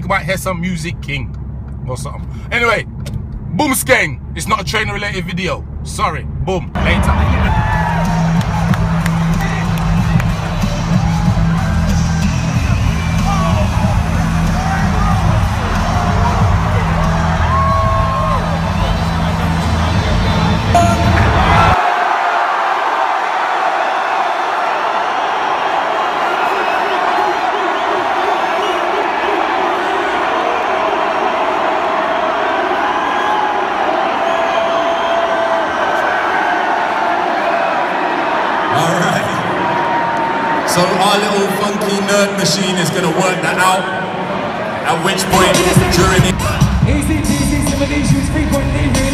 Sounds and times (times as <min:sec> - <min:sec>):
Music: 0:06.8 - 0:21.8, 0:45.2 - 0:49.1
Cheering: 0:06.8 - 0:49.1.